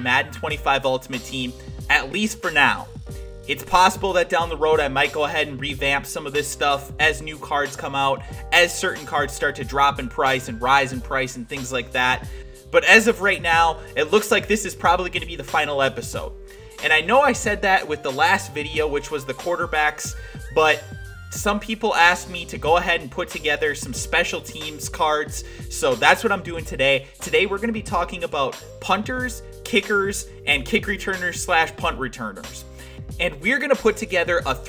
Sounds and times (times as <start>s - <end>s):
Music: 0.0s - 34.6s
Speech: 0.0s - 34.6s.